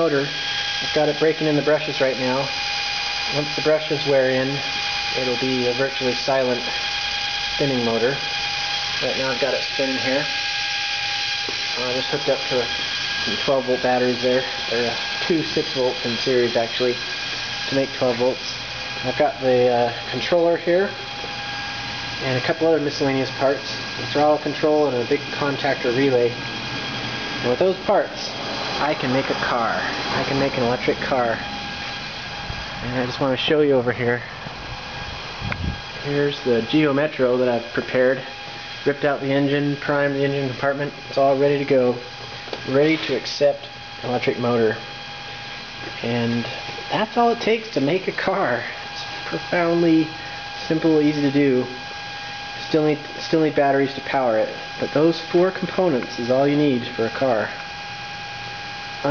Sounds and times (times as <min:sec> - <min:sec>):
Speech: 0:00.0 - 0:02.5, 0:03.3 - 0:06.7, 0:07.6 - 0:08.2, 0:09.0 - 0:10.3, 0:11.8 - 0:12.7, 0:13.3 - 0:17.0, 0:17.7 - 0:21.0, 0:22.2 - 0:26.4, 0:27.4 - 0:31.4, 0:32.8 - 0:34.4, 0:36.0 - 0:42.0, 0:42.6 - 0:44.8, 0:45.9 - 0:51.8, 0:52.6 - 0:57.6
Engine: 0:00.0 - 0:59.1.